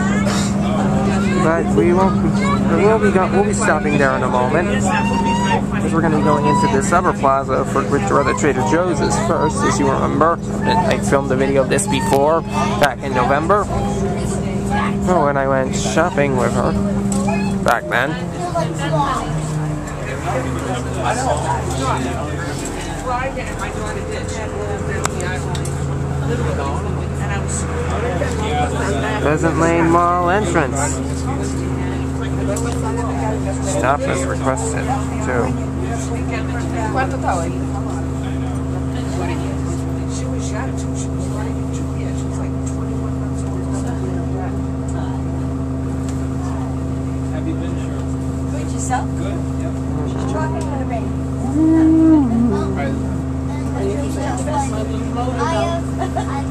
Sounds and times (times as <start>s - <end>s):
Speech: 0.0s - 19.4s, 20.0s - 45.3s
Bus: 0.0s - 56.5s.